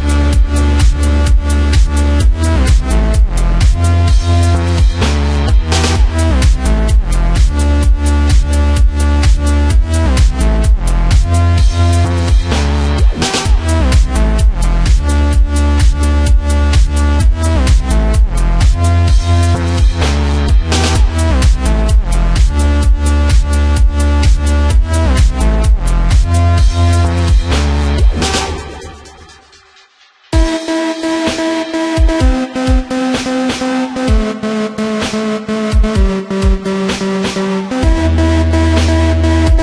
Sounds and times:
Dubstep: 0.0 - 39.6.

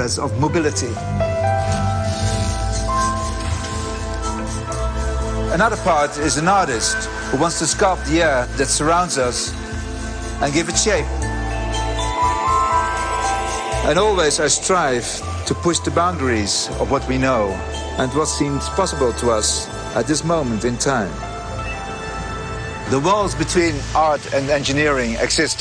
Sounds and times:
Music: 0.0 - 25.6.

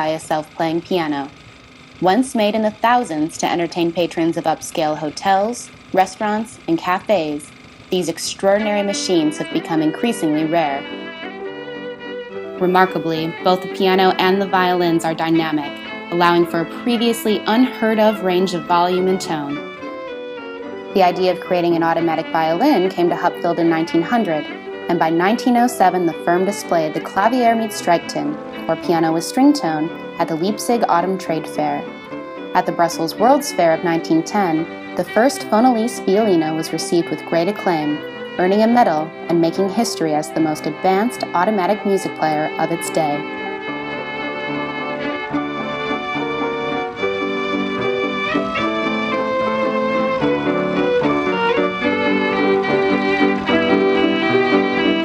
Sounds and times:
Speech: 0.0 - 1.3, 2.0 - 10.8, 12.6 - 19.6, 21.0 - 31.9, 32.6 - 43.2
Music: 0.0 - 55.0.

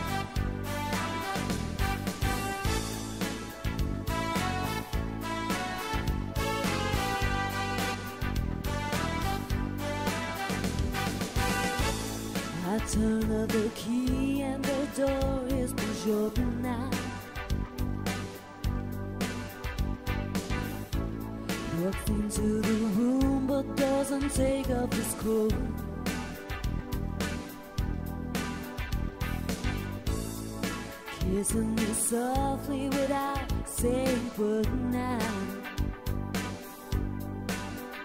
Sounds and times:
Music: 0.0 - 38.0.

